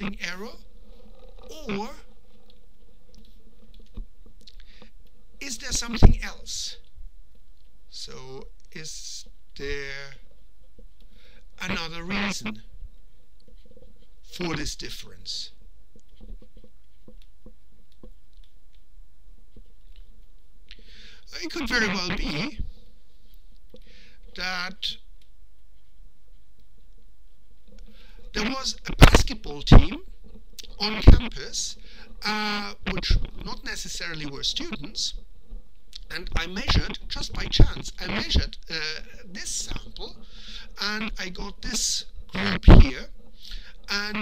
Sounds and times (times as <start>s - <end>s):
Speech: 0.0s - 0.6s, 1.5s - 2.1s, 5.4s - 6.8s, 7.9s - 10.2s, 11.6s - 12.6s, 14.3s - 15.6s, 21.3s - 22.6s, 24.4s - 25.0s, 28.3s - 35.2s, 36.0s - 40.2s, 40.8s - 43.1s, 43.9s - 44.2s.